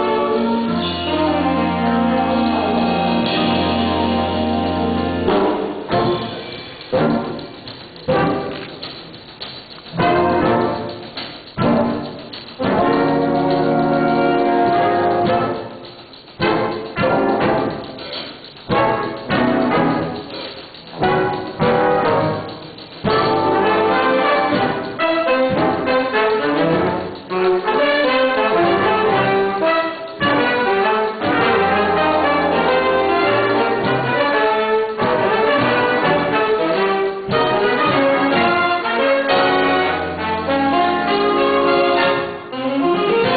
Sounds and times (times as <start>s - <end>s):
Jazz: 0.0s - 43.3s.